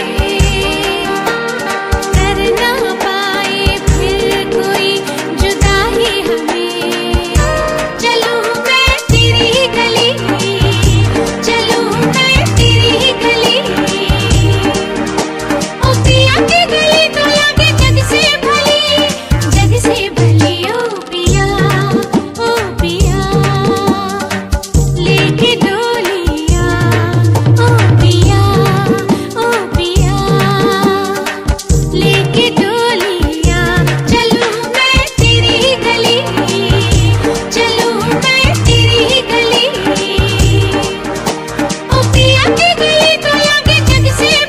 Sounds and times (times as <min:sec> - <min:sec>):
Music of Bollywood: 0:00.0 - 0:44.4.